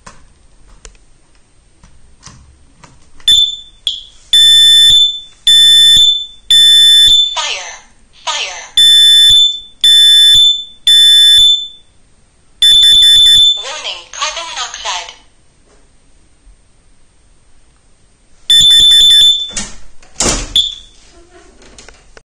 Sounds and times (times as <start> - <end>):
Smoke detector, smoke alarm: 3.3 - 7.4, 8.8 - 12.0, 12.6 - 13.7, 18.5 - 19.6, 20.6 - 21.0.